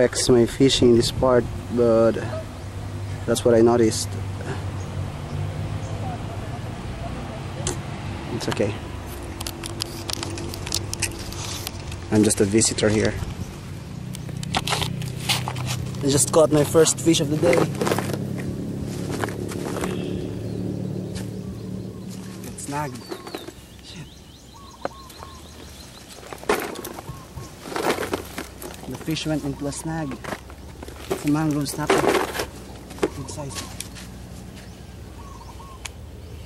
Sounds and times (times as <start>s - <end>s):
Speech: 0.0s - 2.5s, 12.1s - 13.2s, 16.0s - 17.7s, 22.5s - 23.2s, 28.9s - 30.4s, 31.2s - 32.3s, 33.0s - 33.8s
Environmental noise: 0.0s - 36.4s
Outside, rural or natural: 0.0s - 36.4s.